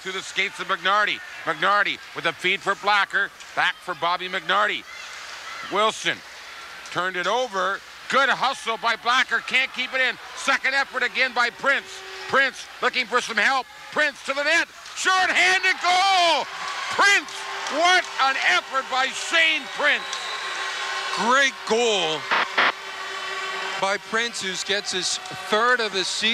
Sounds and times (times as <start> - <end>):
Speech: 0.0 - 4.9, 6.9 - 20.1, 21.2 - 22.2, 23.8 - 26.3.